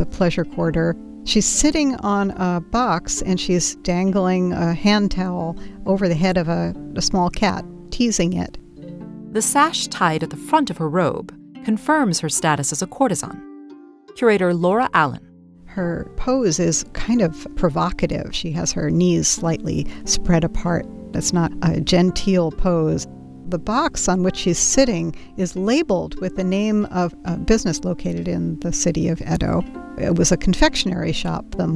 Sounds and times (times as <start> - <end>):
Speech: 0.0 - 8.6, 9.4 - 13.4, 14.2 - 31.7
Music: 0.0 - 31.7.